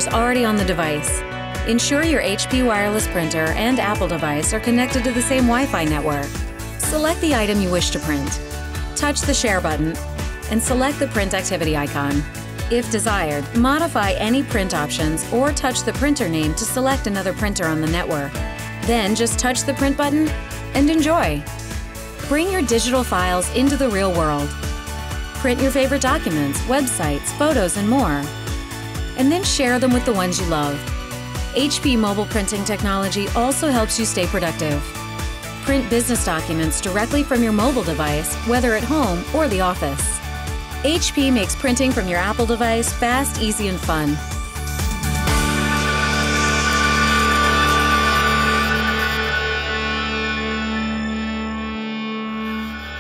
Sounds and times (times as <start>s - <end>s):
Speech: 0.0s - 8.4s, 9.0s - 21.4s, 22.2s - 24.5s, 25.4s - 28.3s, 29.2s - 30.8s, 31.6s - 34.9s, 35.6s - 40.2s, 40.8s - 44.2s
Music: 0.0s - 53.0s.